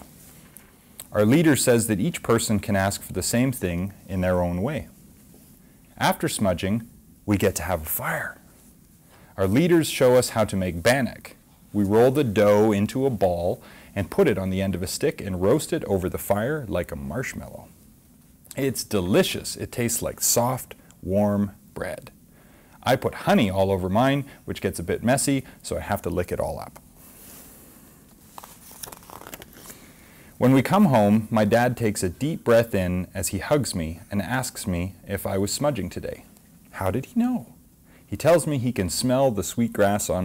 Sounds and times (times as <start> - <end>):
Inside, small room: 0.0 - 40.2
Speech: 1.0 - 5.0, 6.0 - 8.5, 9.4 - 17.8, 18.5 - 22.2, 22.8 - 26.8, 30.4 - 40.2.